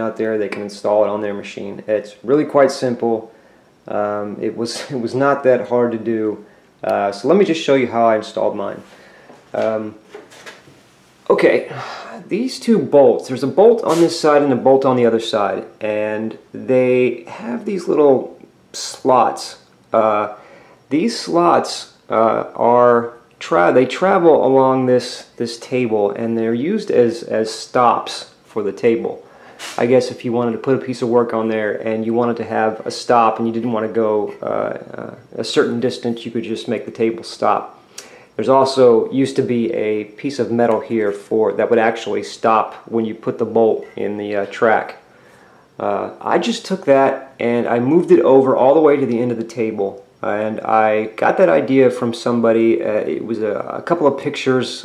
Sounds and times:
Speech: 0.0 - 3.3, 3.9 - 8.9, 9.5 - 10.1, 11.2 - 37.8, 38.4 - 45.1, 45.8 - 54.8
Inside, small room: 0.0 - 54.8.

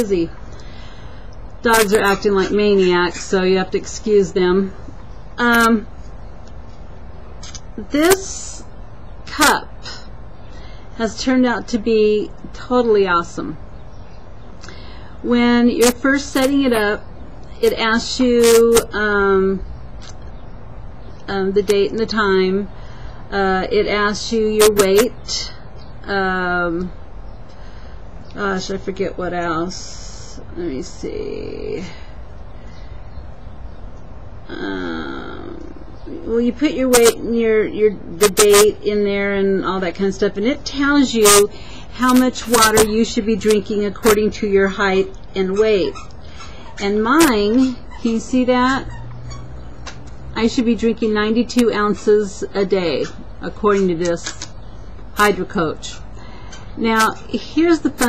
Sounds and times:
Speech: 0.0 - 0.4, 1.6 - 4.8, 5.4 - 5.9, 7.5 - 8.7, 9.3 - 10.1, 11.0 - 13.6, 15.2 - 17.0, 17.6 - 19.6, 21.3 - 22.7, 23.3 - 27.0, 28.4 - 32.0, 34.5 - 46.0, 46.8 - 48.9, 50.4 - 54.4, 55.2 - 56.0, 56.8 - 58.0.

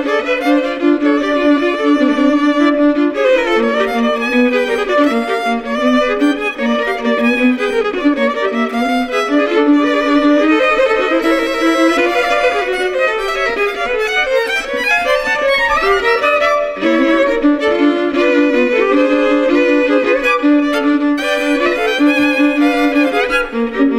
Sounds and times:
Violin, fiddle: 0.0 - 23.9.

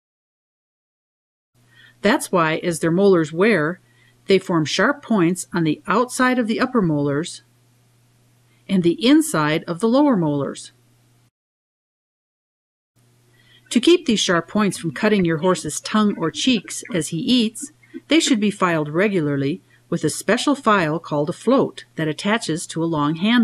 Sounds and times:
Speech: 2.0 - 7.5, 8.7 - 10.8, 13.7 - 23.4.

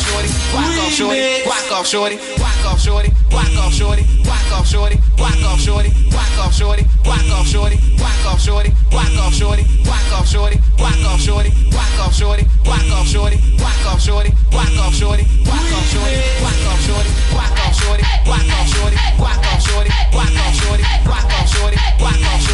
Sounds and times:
Music: 0.0 - 22.5.

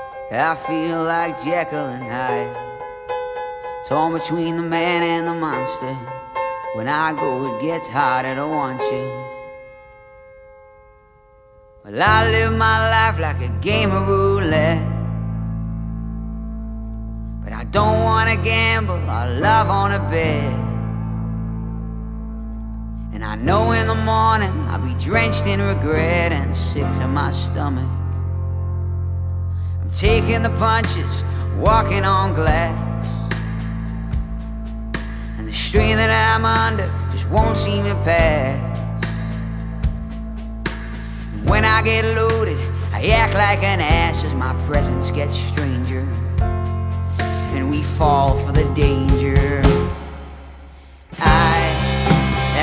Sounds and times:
Music: 0.0 - 52.6.

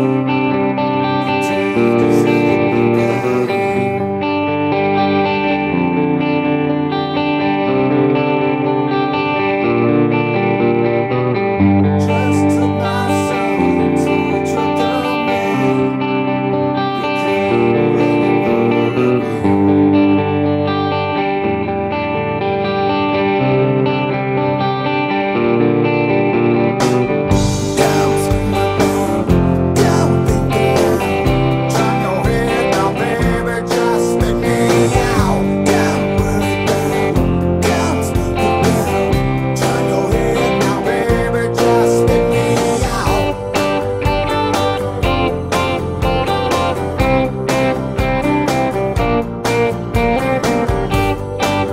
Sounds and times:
Guitar: 0.0 - 51.7.

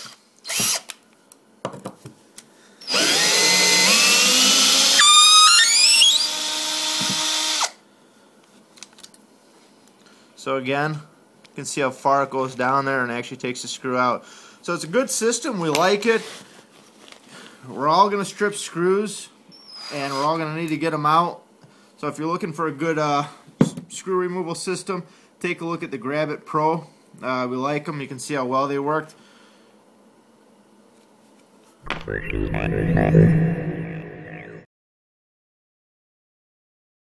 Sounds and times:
Drill: 0.0 - 0.9, 2.8 - 7.8.

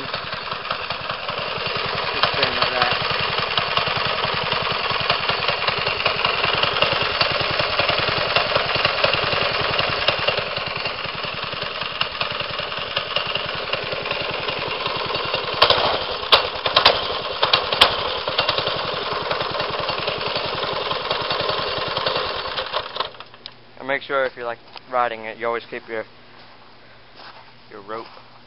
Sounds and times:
Motorcycle: 0.0 - 23.4
Engine: 0.0 - 28.4
Outside, urban or manmade: 0.0 - 28.4.

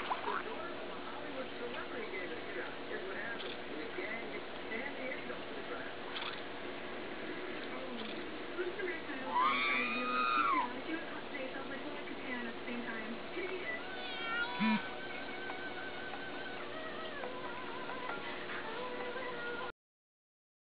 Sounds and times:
Speech: 0.2 - 6.1, 7.6 - 14.8
Music: 12.9 - 19.8.

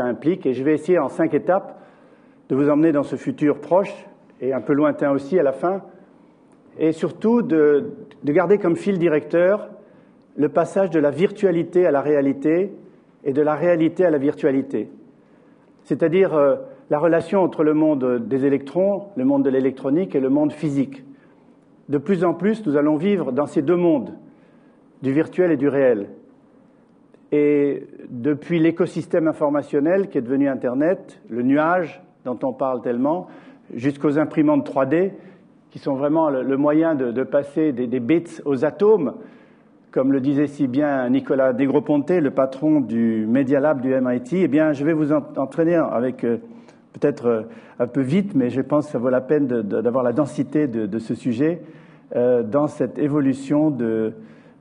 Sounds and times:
Speech: 0.0 - 1.8, 2.5 - 6.0, 6.7 - 9.8, 10.4 - 15.0, 15.8 - 21.1, 21.9 - 24.2, 25.0 - 26.3, 27.3 - 39.2, 39.9 - 54.2.

